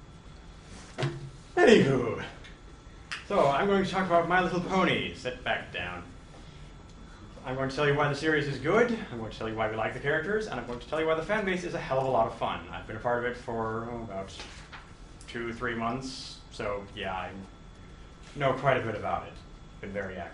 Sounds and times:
Narration, monologue: 0:00.0 - 0:20.3
Male speech, man speaking: 0:01.6 - 0:02.4, 0:03.3 - 0:06.1, 0:07.4 - 0:14.5, 0:15.3 - 0:17.6, 0:18.4 - 0:20.3.

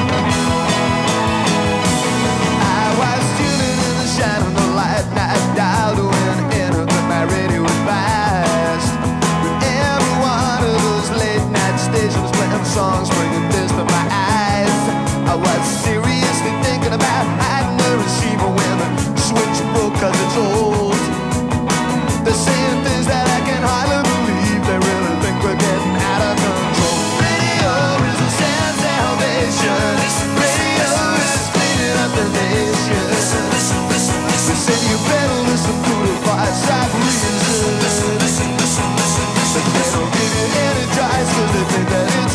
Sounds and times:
Music: 0:00.0 - 0:42.3.

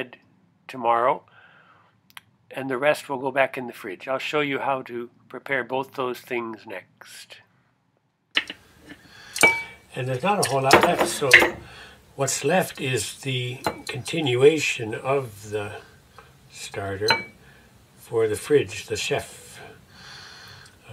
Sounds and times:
Speech: 0:00.0 - 0:01.3, 0:02.5 - 0:07.5, 0:09.9 - 0:11.6, 0:12.2 - 0:15.9, 0:16.5 - 0:17.3, 0:18.0 - 0:19.8
Dishes, pots, and pans: 0:08.4 - 0:09.8, 0:10.4 - 0:11.7, 0:17.1 - 0:17.4.

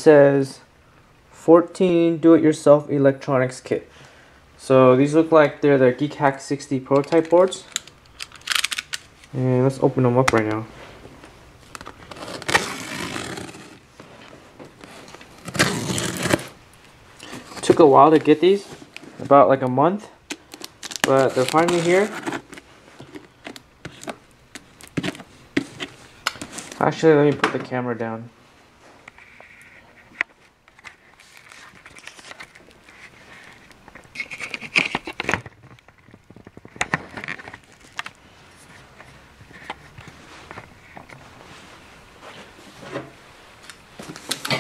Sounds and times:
Speech: 0:00.0 - 0:00.7, 0:01.4 - 0:03.9, 0:04.6 - 0:07.7, 0:09.3 - 0:10.7, 0:17.6 - 0:20.2, 0:21.1 - 0:22.2, 0:26.8 - 0:28.4.

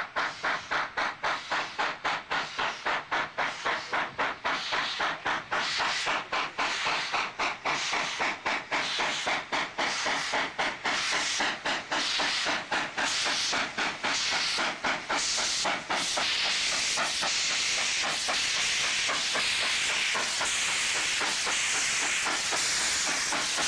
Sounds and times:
Clickety-clack: 0:00.0 - 0:23.6
Hiss: 0:00.0 - 0:23.6
Railroad car, train wagon: 0:00.0 - 0:23.6
Train: 0:00.0 - 0:23.6.

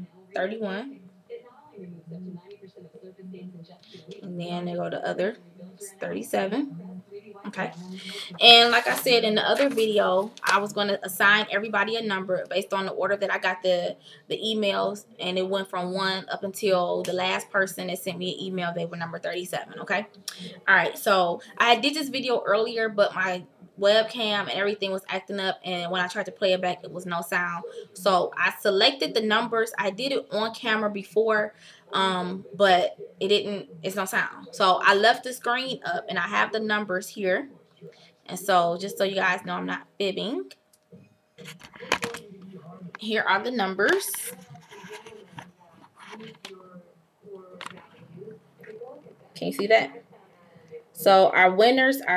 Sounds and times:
Speech: 0:00.0 - 0:40.6, 0:41.4 - 0:52.1.

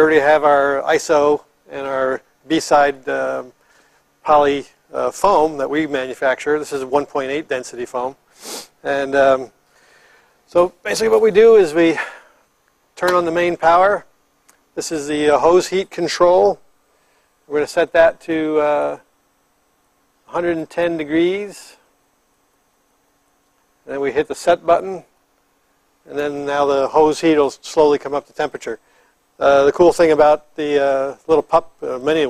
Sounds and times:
Speech: 0:00.0 - 0:03.6, 0:04.2 - 0:08.2, 0:08.8 - 0:09.5, 0:10.5 - 0:12.2, 0:13.0 - 0:14.1, 0:14.8 - 0:16.6, 0:17.5 - 0:19.0, 0:20.3 - 0:21.8, 0:23.9 - 0:25.1, 0:26.1 - 0:28.8, 0:29.4 - 0:32.2.

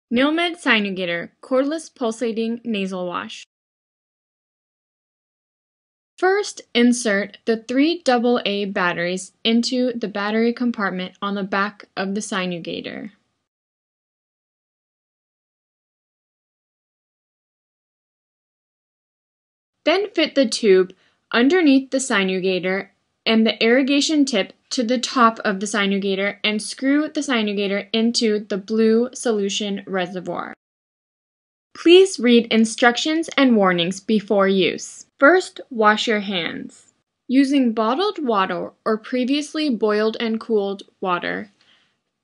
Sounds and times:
Speech: 0:00.1 - 0:03.5, 0:06.2 - 0:13.2, 0:19.9 - 0:30.6, 0:31.8 - 0:41.6.

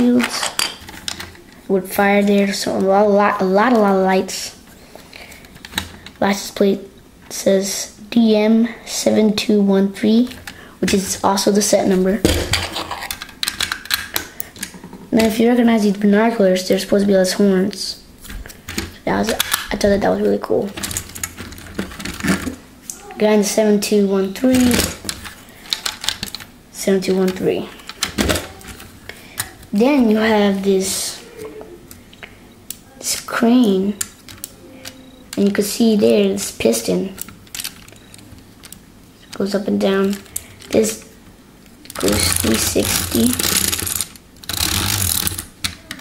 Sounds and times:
Speech: 0:00.0 - 0:00.5, 0:01.7 - 0:04.6, 0:06.2 - 0:12.3, 0:15.1 - 0:18.0, 0:19.0 - 0:20.8, 0:22.9 - 0:25.0, 0:26.8 - 0:27.8, 0:29.7 - 0:31.8, 0:32.8 - 0:34.0, 0:34.6 - 0:37.2, 0:39.4 - 0:41.1, 0:42.0 - 0:43.4.

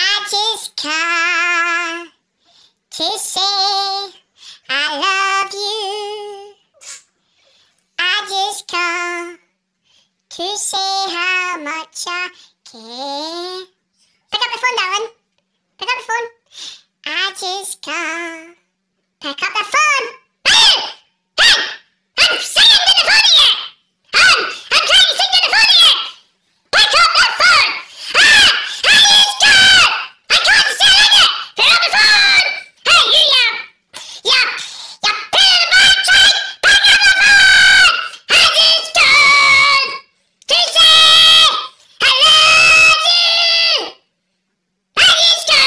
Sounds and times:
Speech: 0:08.0 - 0:09.5, 0:10.3 - 0:15.2, 0:15.8 - 0:16.4, 0:17.0 - 0:26.2, 0:26.8 - 0:44.0, 0:45.0 - 0:45.6.

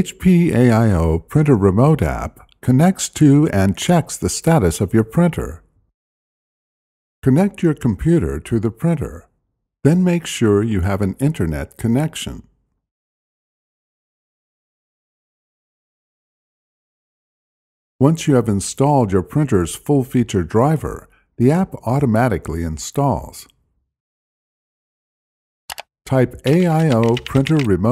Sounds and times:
Speech: 0:00.0 - 0:05.6, 0:07.2 - 0:09.3, 0:09.9 - 0:12.5, 0:18.0 - 0:23.6, 0:26.1 - 0:27.9.

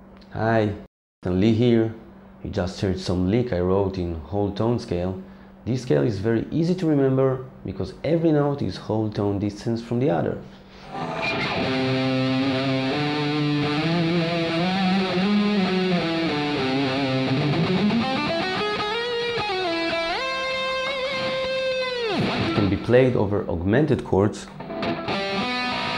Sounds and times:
Speech: 0:00.3 - 0:10.5, 0:22.6 - 0:24.6
Electric guitar: 0:10.8 - 0:22.9, 0:24.5 - 0:25.9.

